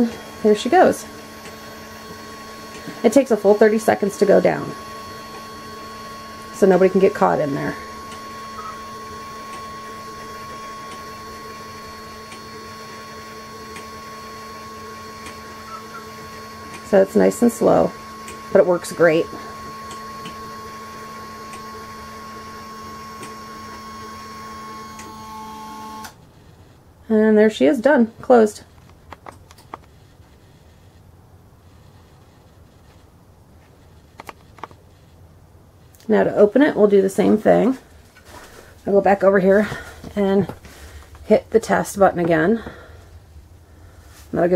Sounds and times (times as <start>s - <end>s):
Speech: 0.0s - 1.1s, 3.0s - 4.8s, 6.6s - 7.8s, 16.9s - 18.0s, 18.6s - 19.4s, 27.1s - 28.6s, 36.0s - 37.8s, 38.9s - 40.6s, 41.3s - 42.7s, 44.3s - 44.5s.